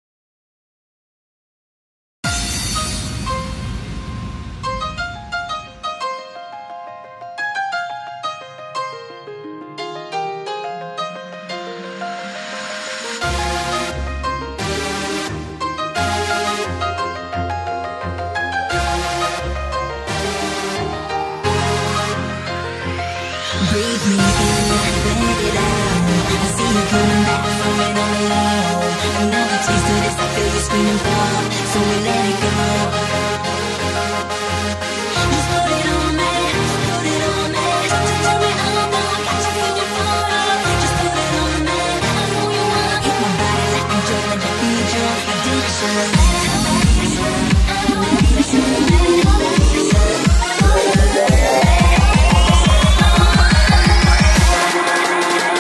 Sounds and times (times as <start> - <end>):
Music: 2.2 - 55.6.